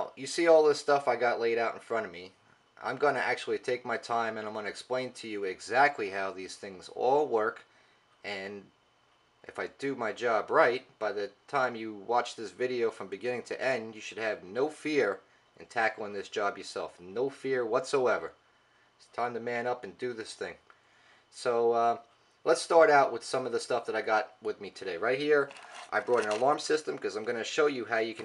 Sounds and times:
Speech: 0.0 - 8.8, 9.4 - 18.4, 19.0 - 20.6, 21.3 - 28.2.

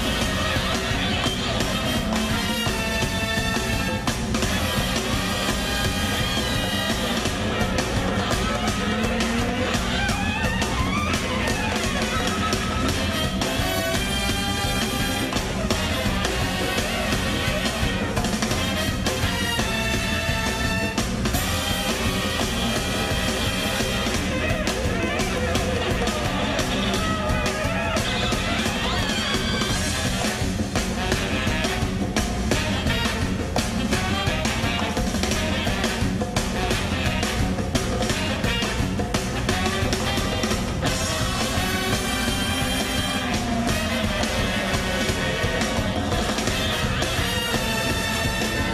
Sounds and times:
Music: 0.0 - 48.7.

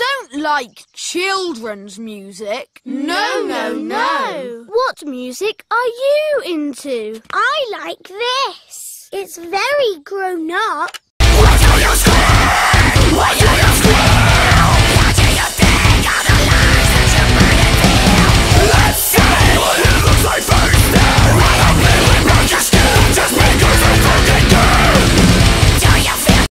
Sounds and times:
Music: 11.2 - 26.5.

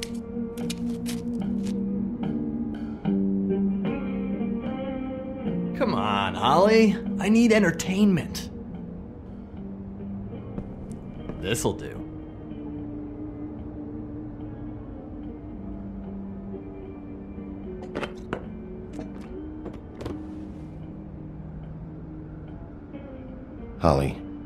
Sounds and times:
Music: 0.0 - 24.4
Speech: 5.8 - 8.5, 11.4 - 12.0, 23.8 - 24.2.

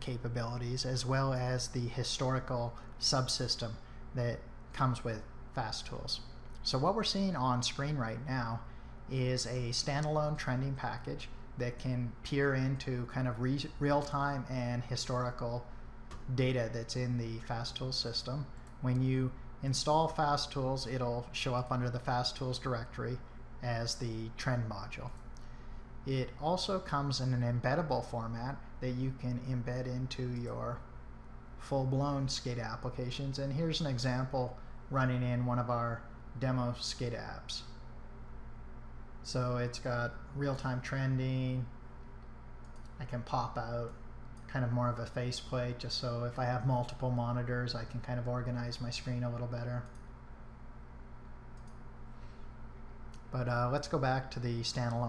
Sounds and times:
Speech: 0.0 - 25.2, 26.1 - 30.9, 31.6 - 37.8, 39.2 - 41.7, 43.0 - 50.0, 53.3 - 55.0.

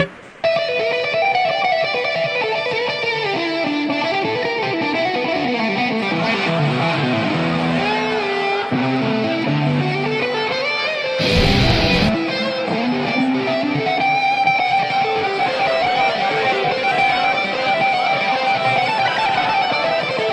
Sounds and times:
Electric guitar: 0.0 - 20.3.

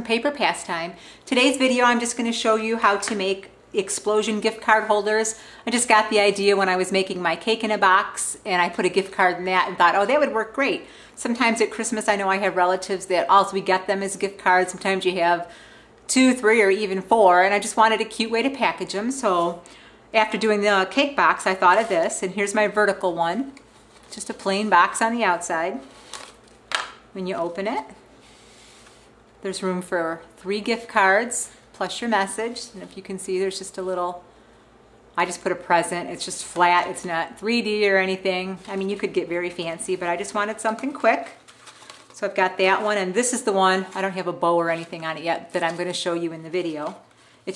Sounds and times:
Speech: 0.0 - 15.5, 16.1 - 19.6, 20.2 - 25.9, 27.2 - 28.0, 29.4 - 34.2, 35.2 - 41.4, 42.2 - 47.5.

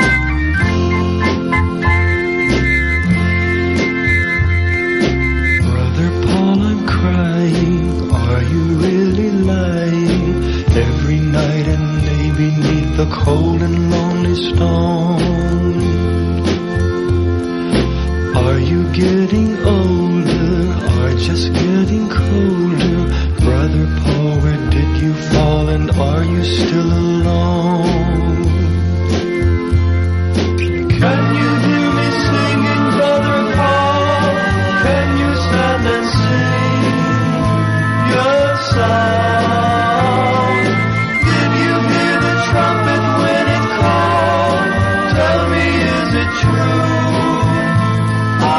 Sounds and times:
Music: 0.0 - 48.5.

